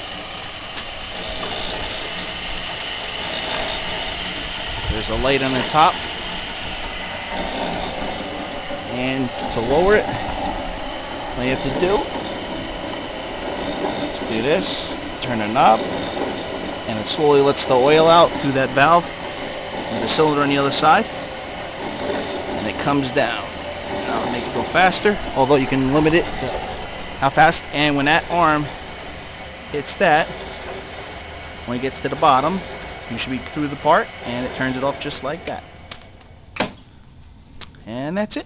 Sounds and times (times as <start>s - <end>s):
Speech: 4.9s - 6.0s, 8.9s - 10.2s, 11.4s - 12.2s, 14.2s - 15.9s, 16.9s - 19.1s, 19.9s - 21.1s, 22.6s - 26.6s, 27.2s - 28.7s, 29.7s - 30.3s, 31.7s - 35.7s, 37.8s - 38.4s.